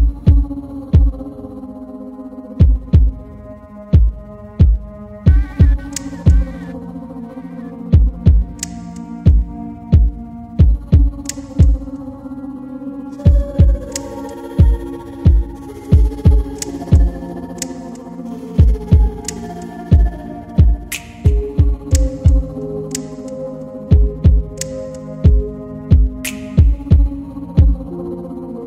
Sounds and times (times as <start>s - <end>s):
Heart murmur: 4.0s - 8.6s, 14.6s - 17.1s.